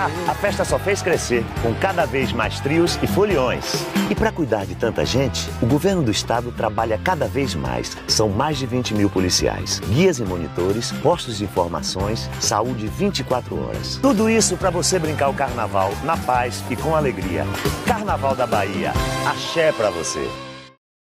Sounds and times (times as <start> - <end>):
Rhythm and blues: 0.0 - 20.4
Speech: 0.0 - 20.4.